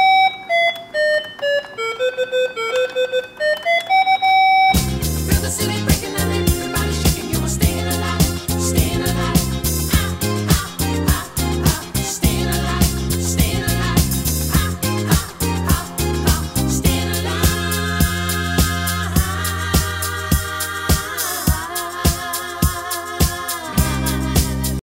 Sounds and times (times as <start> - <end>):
Rhythm and blues: 4.7 - 24.8.